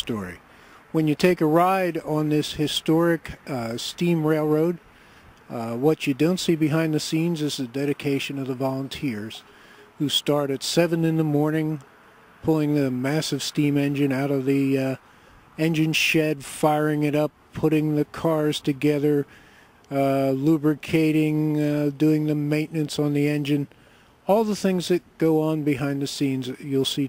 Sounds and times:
Speech: 0.0s - 4.8s, 5.5s - 11.8s, 12.4s - 15.0s, 15.6s - 19.3s, 19.9s - 27.0s.

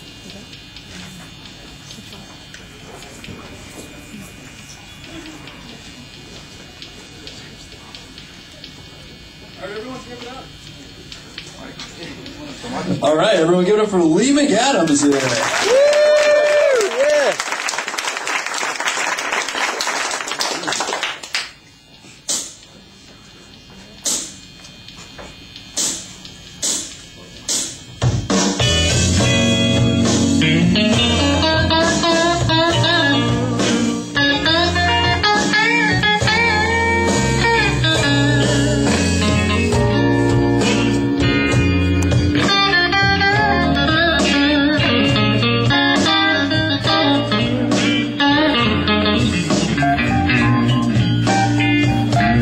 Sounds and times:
Electric guitar: 23.5s - 52.4s.

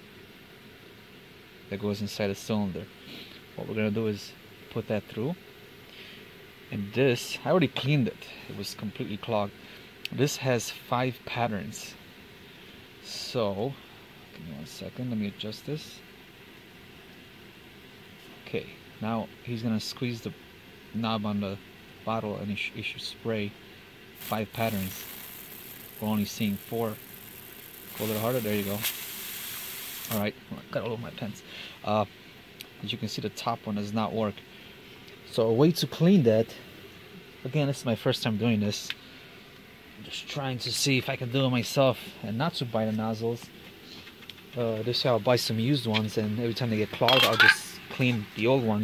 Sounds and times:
Speech: 1.7s - 2.9s, 3.6s - 5.4s, 6.7s - 12.0s, 13.0s - 16.0s, 18.4s - 20.4s, 21.0s - 23.6s, 24.2s - 25.1s, 26.0s - 27.0s, 28.0s - 28.9s, 30.1s - 32.1s, 32.8s - 34.4s, 35.2s - 36.6s, 37.4s - 39.0s, 40.0s - 43.5s, 44.6s - 48.8s
Spray: 24.2s - 30.2s.

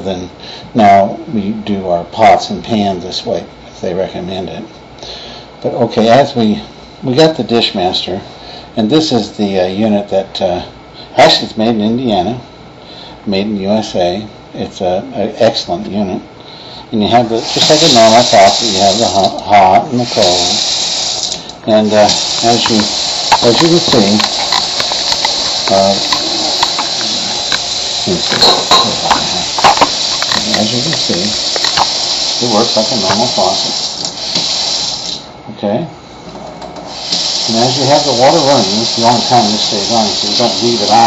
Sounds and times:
Speech: 0.0s - 4.7s, 5.6s - 12.5s, 13.2s - 16.3s, 16.9s - 20.6s, 21.6s - 24.3s, 25.7s - 27.3s, 28.1s - 29.6s, 30.4s - 31.4s, 32.4s - 33.8s, 35.4s - 36.0s, 37.5s - 41.0s
Sink (filling or washing): 17.2s - 35.3s, 36.9s - 41.0s
Water tap, faucet: 17.3s - 19.4s, 20.0s - 35.3s, 36.9s - 41.0s.

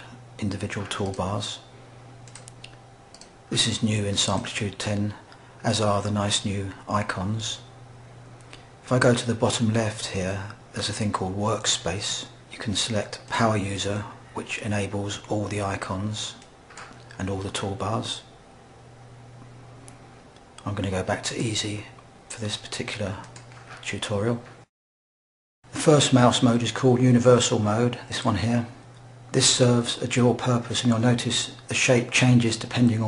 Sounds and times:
Speech: 0.0s - 1.7s, 3.5s - 7.7s, 8.8s - 16.5s, 17.1s - 18.3s, 20.6s - 24.6s, 25.7s - 33.0s.

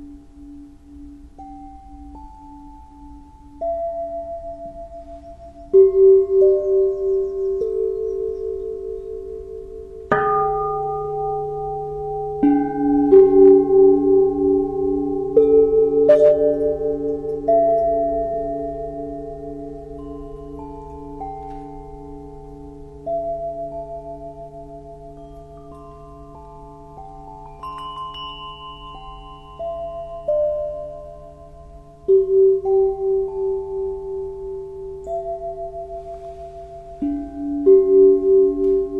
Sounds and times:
Singing bowl: 0.0s - 38.9s.

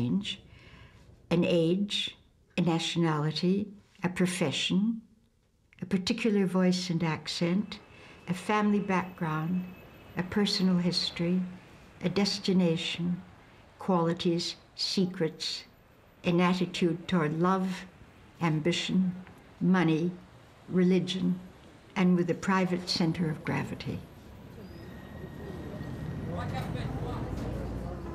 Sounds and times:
Speech: 0.0s - 0.4s, 1.3s - 5.1s, 5.8s - 15.7s, 16.3s - 24.1s, 25.5s - 28.1s.

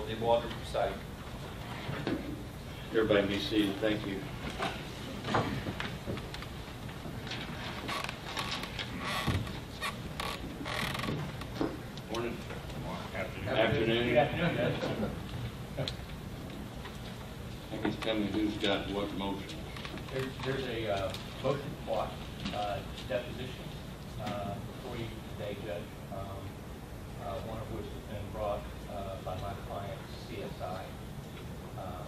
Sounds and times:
Male speech, man speaking: 0.0s - 1.1s, 2.9s - 4.3s, 12.1s - 15.2s, 17.7s - 26.6s, 27.2s - 31.0s, 31.8s - 32.0s
Narration, monologue: 0.0s - 32.0s.

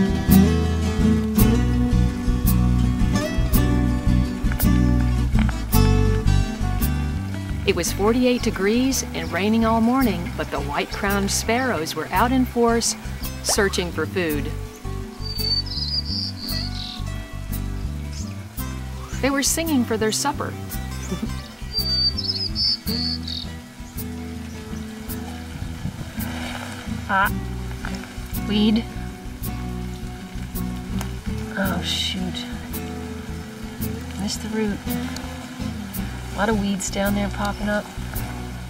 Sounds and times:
Chirp, tweet: 14.7s - 17.1s, 21.0s - 24.9s.

